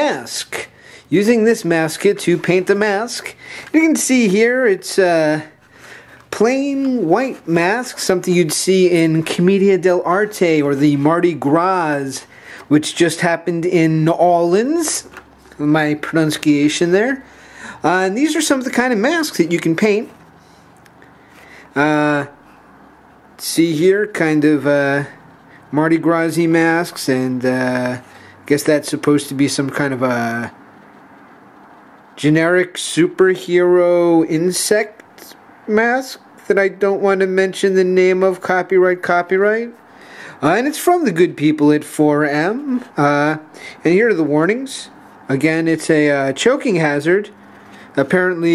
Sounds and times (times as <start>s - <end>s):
Speech: 0.0s - 5.6s, 6.3s - 20.2s, 21.8s - 22.4s, 23.4s - 30.6s, 32.2s - 39.8s, 40.4s - 47.4s, 48.0s - 48.5s.